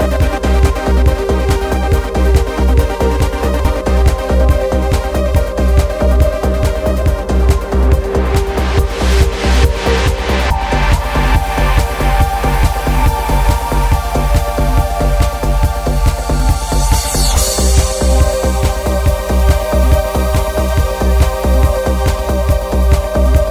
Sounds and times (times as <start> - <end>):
Techno: 0.0 - 23.5
Trance music: 0.0 - 23.5.